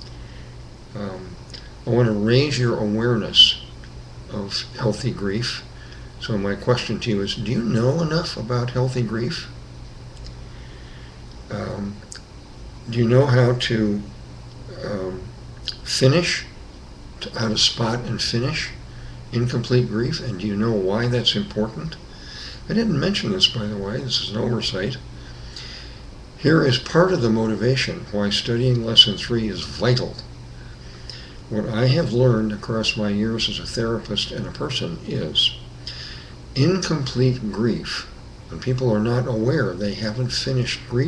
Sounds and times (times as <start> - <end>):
Speech: 0.9 - 3.7, 4.3 - 9.6, 11.5 - 12.2, 12.8 - 16.6, 17.2 - 22.0, 22.7 - 25.1, 26.4 - 30.3, 31.5 - 35.7, 36.6 - 41.0.